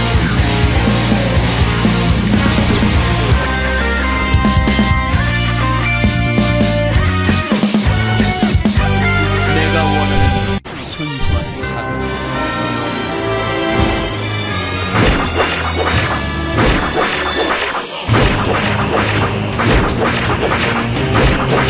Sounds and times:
Music: 0.0 - 21.7
Speech: 9.3 - 12.1.

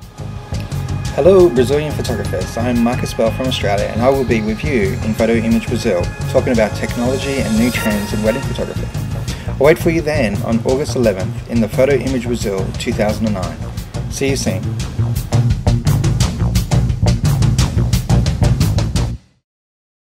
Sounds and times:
Music: 0.0 - 19.4
Speech: 1.2 - 9.0, 9.6 - 14.7.

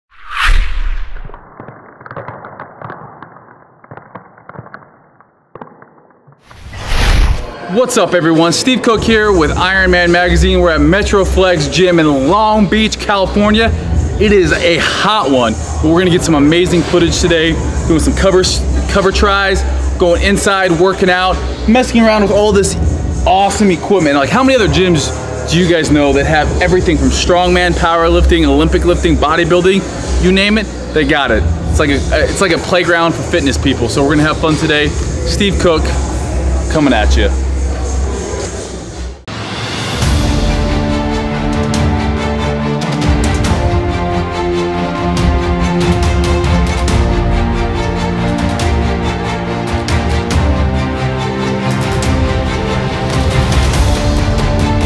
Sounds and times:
Speech: 7.6 - 37.4.

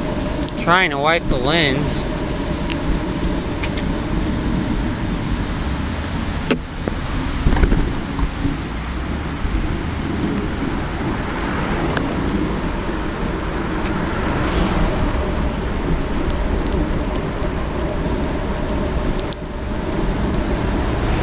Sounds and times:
Raindrop: 0.0 - 21.2.

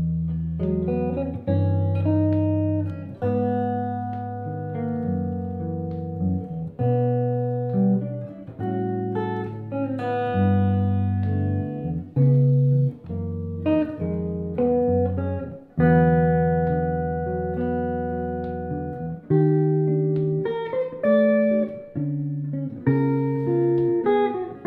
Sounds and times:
Strum: 0.0 - 24.6.

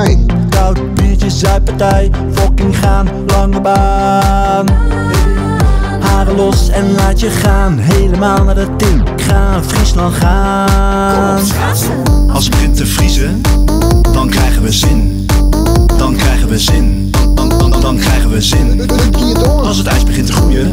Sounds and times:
Pop music: 0.0 - 20.7.

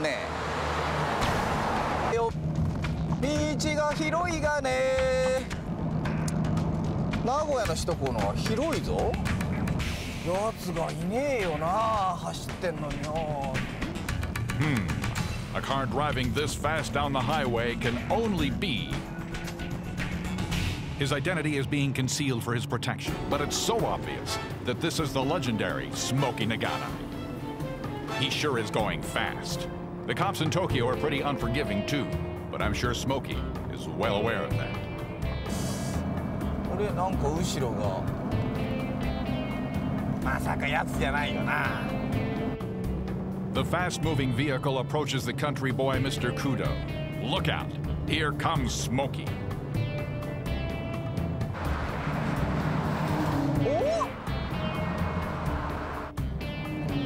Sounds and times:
Speech: 0.0 - 0.3, 3.2 - 5.5, 7.2 - 9.2, 10.3 - 13.6, 15.6 - 19.0, 21.0 - 27.0, 28.2 - 34.7, 36.7 - 38.0, 40.3 - 41.9, 43.6 - 49.3
Music: 2.1 - 57.0.

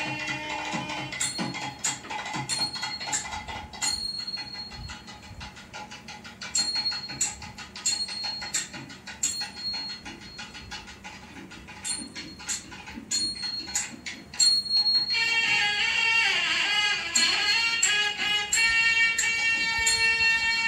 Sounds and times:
Inside, small room: 0.0 - 20.6
Music: 0.0 - 20.6.

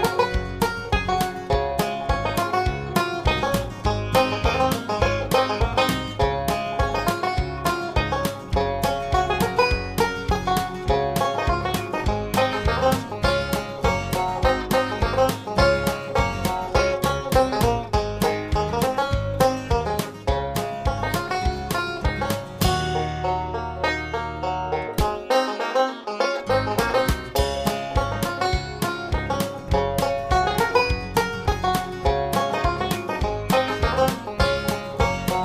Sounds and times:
Music: 0.0 - 35.4.

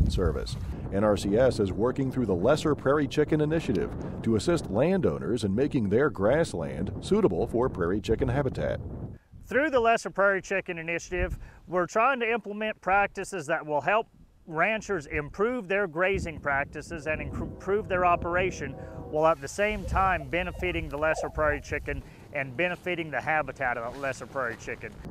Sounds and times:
Speech: 0.0 - 8.8, 9.5 - 25.0.

